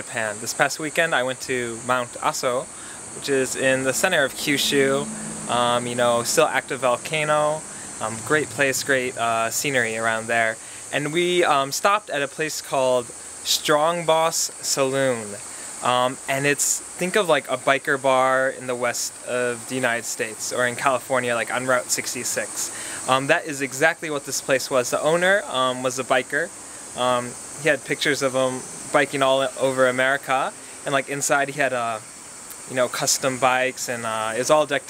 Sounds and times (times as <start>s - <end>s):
Speech: 0.0s - 34.8s.